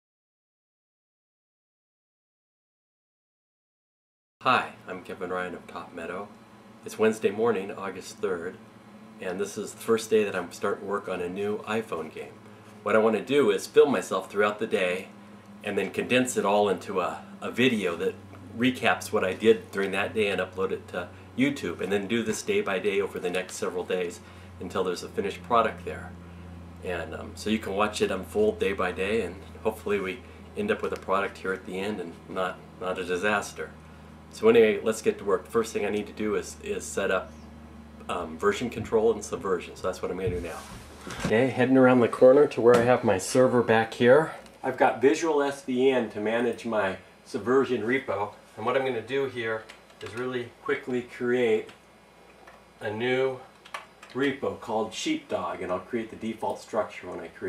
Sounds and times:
Speech: 4.4 - 8.6, 9.2 - 26.2, 26.8 - 33.7, 34.4 - 37.4, 38.0 - 51.8, 52.8 - 53.5, 54.1 - 57.4.

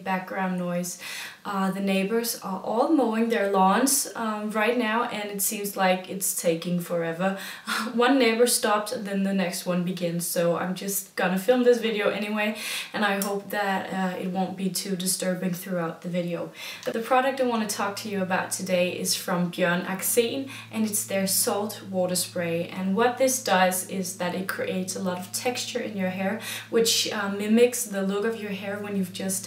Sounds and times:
Speech: 0.0 - 29.4.

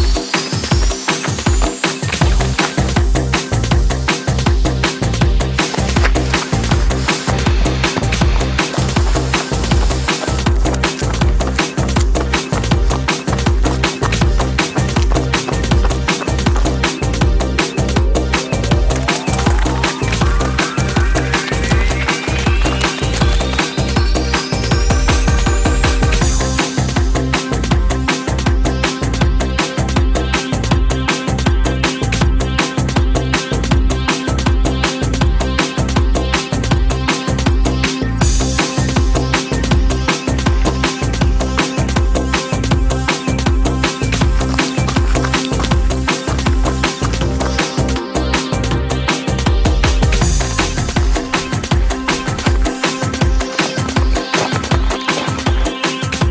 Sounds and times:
Run: 0.0 - 4.6, 5.5 - 30.9, 34.4 - 48.3, 49.2 - 56.3
Music: 0.0 - 56.3.

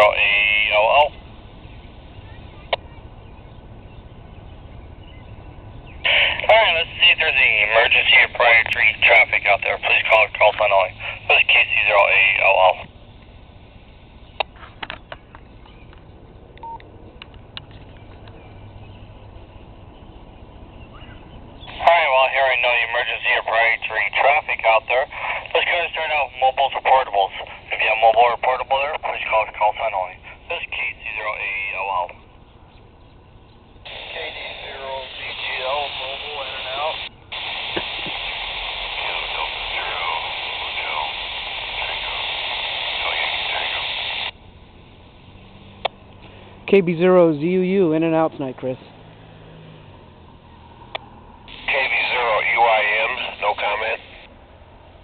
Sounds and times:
Radio: 0.0 - 1.2, 6.0 - 12.9, 21.7 - 32.2, 33.9 - 44.4, 51.5 - 54.3
Speech: 0.0 - 1.2, 6.1 - 12.9, 21.7 - 32.2, 34.0 - 37.1, 38.9 - 41.2, 42.9 - 43.9, 46.7 - 48.9, 51.7 - 54.2.

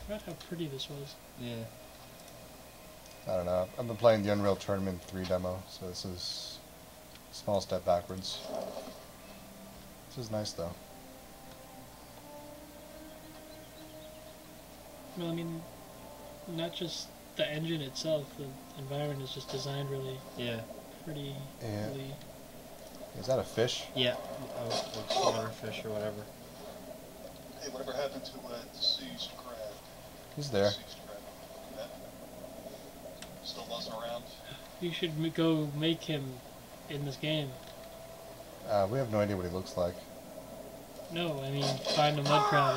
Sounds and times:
Speech: 0.0 - 1.7, 3.3 - 6.6, 7.4 - 8.5, 10.2 - 10.8, 15.1 - 15.6, 16.5 - 22.2, 23.2 - 26.3, 27.6 - 29.8, 30.4 - 31.2, 33.4 - 37.6, 38.7 - 40.0, 41.1 - 42.7.

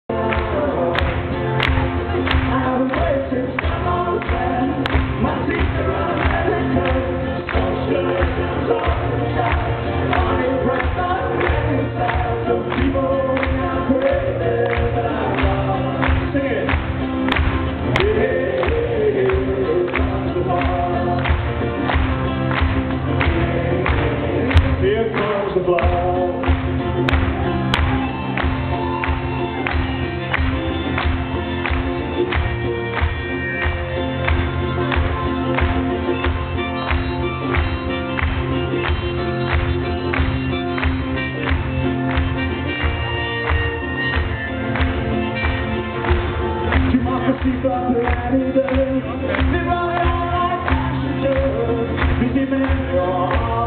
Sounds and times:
Rhythm and blues: 0.1 - 53.6.

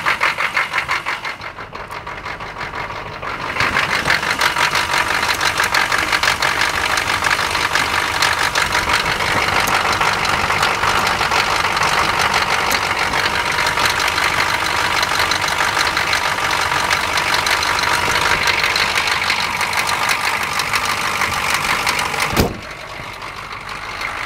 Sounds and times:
Vehicle: 0.0 - 24.2
Vibration: 1.3 - 24.2.

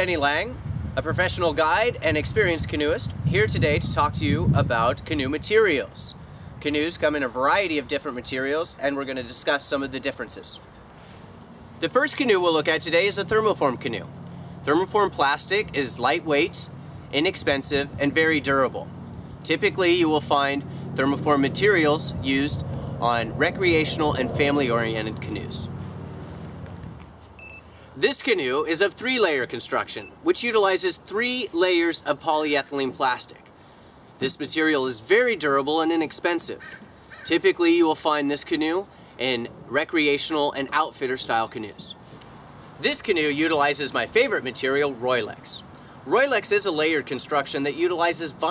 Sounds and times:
Speech: 0.0 - 10.6, 11.8 - 14.1, 14.7 - 25.7, 28.0 - 33.4, 34.2 - 36.6, 37.3 - 42.0, 42.8 - 48.5.

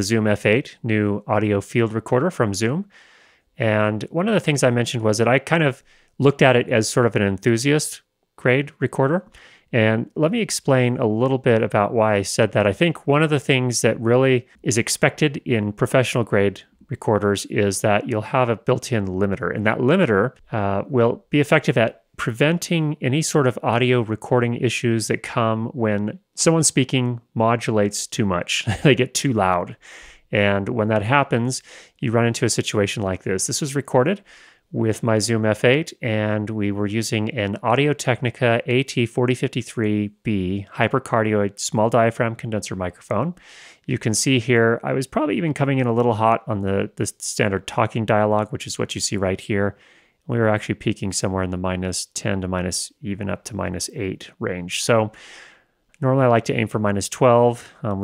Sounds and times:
Speech: 0.0 - 2.9, 3.6 - 55.2, 56.0 - 58.0.

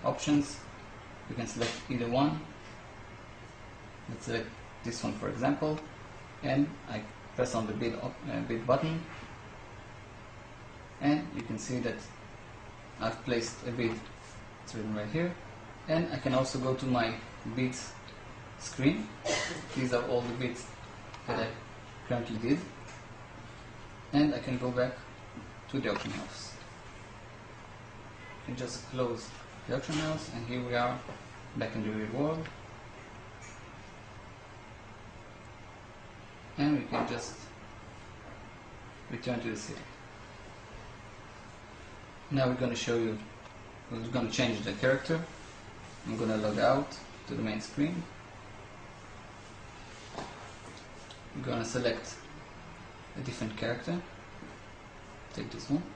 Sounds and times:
Speech: 0.0 - 0.7, 1.3 - 2.6, 4.1 - 9.2, 11.0 - 12.2, 13.0 - 14.1, 14.7 - 18.0, 18.6 - 22.8, 24.1 - 25.1, 25.7 - 26.7, 28.5 - 32.6, 36.6 - 37.6, 39.1 - 40.0, 42.3 - 43.3, 43.9 - 45.4, 46.0 - 48.2, 51.3 - 52.3, 53.2 - 54.1, 55.3 - 55.9
Inside, small room: 0.0 - 55.9.

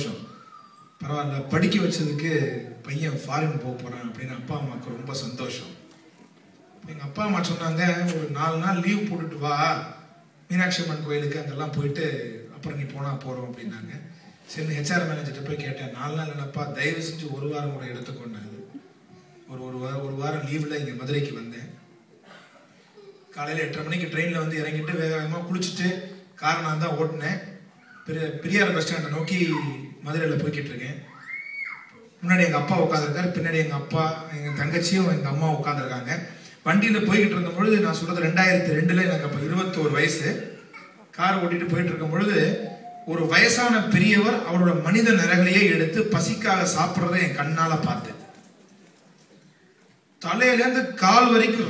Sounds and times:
Male speech, man speaking: 0.0 - 0.3, 1.0 - 5.8, 6.9 - 18.7, 19.5 - 21.8, 23.4 - 31.1, 32.2 - 40.5, 41.2 - 48.3, 50.2 - 51.7
Narration, monologue: 0.0 - 51.7.

